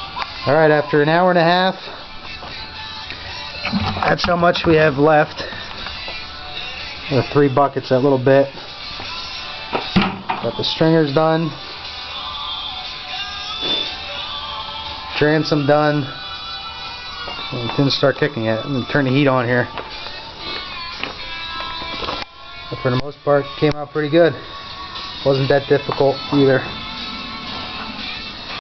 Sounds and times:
Music: 0:00.0 - 0:28.6
Speech: 0:00.5 - 0:01.8, 0:17.6 - 0:19.7, 0:25.3 - 0:26.7.

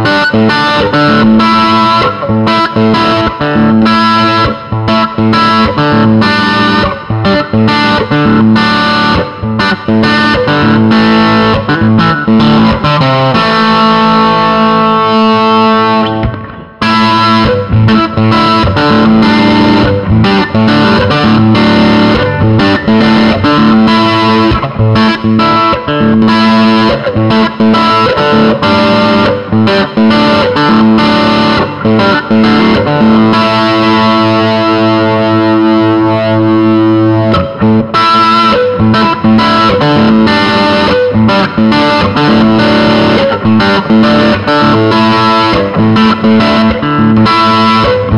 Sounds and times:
Electric guitar: 0:00.0 - 0:48.1.

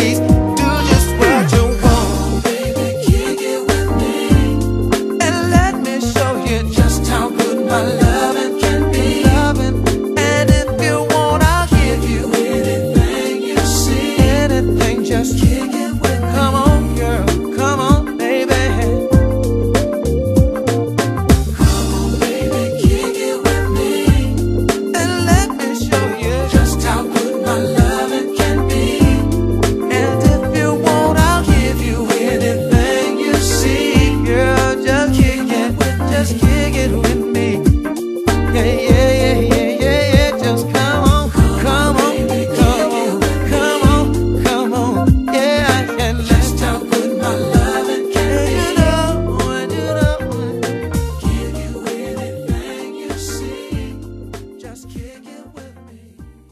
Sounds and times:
Soul music: 0:00.0 - 0:56.5.

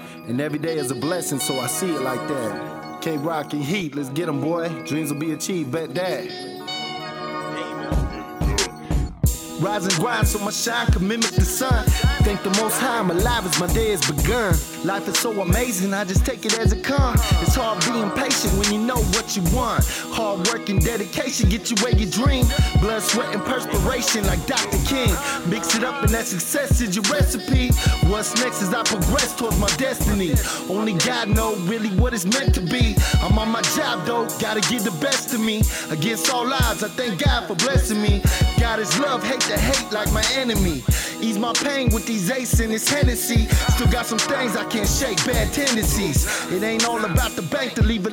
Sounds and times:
Blues: 0:07.9 - 0:48.1.

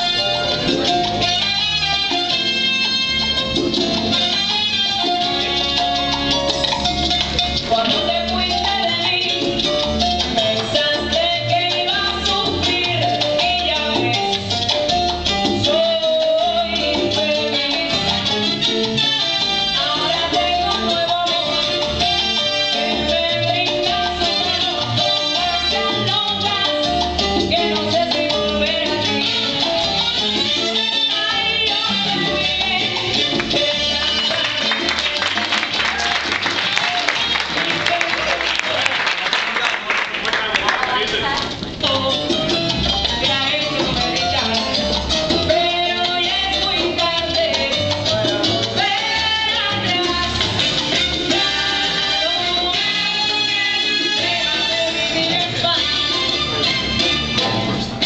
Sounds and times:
Salsa music: 0:00.0 - 0:58.0.

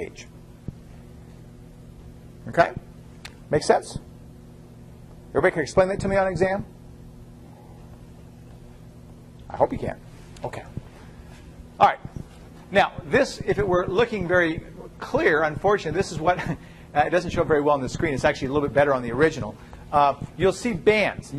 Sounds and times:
Speech: 0:00.0 - 0:00.3, 0:02.4 - 0:02.9, 0:03.5 - 0:04.1, 0:05.3 - 0:06.7, 0:09.5 - 0:10.8, 0:11.8 - 0:12.1, 0:12.7 - 0:21.3.

